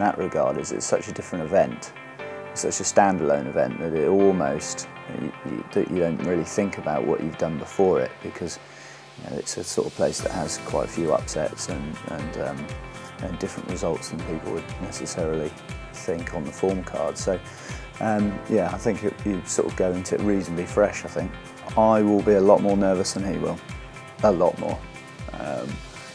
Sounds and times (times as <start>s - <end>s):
Speech: 0.0s - 2.0s, 2.6s - 8.6s, 9.2s - 17.4s, 18.0s - 23.6s, 24.2s - 25.8s
Music: 0.0s - 26.1s.